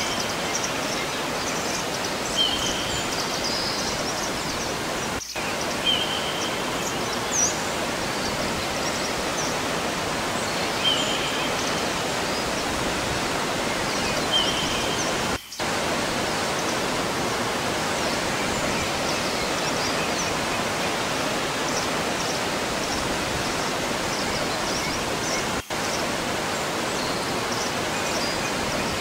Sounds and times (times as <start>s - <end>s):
Pink noise: 0.0s - 29.0s.